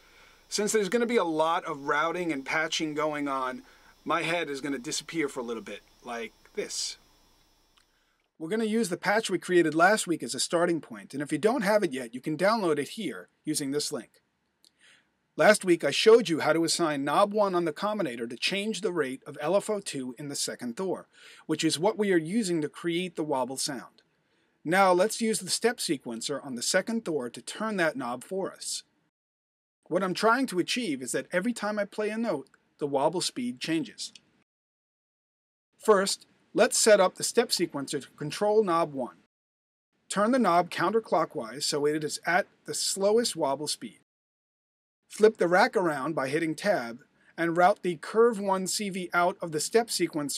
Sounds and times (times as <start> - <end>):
Speech: 0.5 - 7.0, 8.4 - 14.2, 15.4 - 24.0, 24.7 - 28.9, 29.9 - 34.2, 35.8 - 39.3, 40.1 - 44.0, 45.1 - 50.3.